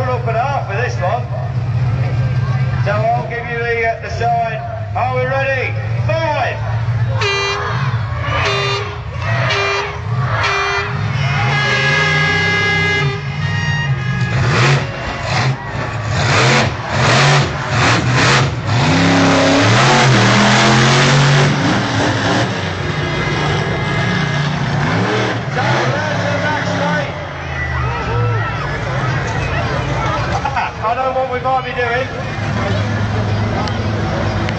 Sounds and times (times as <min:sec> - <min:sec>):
Truck: 0:00.0 - 0:34.5.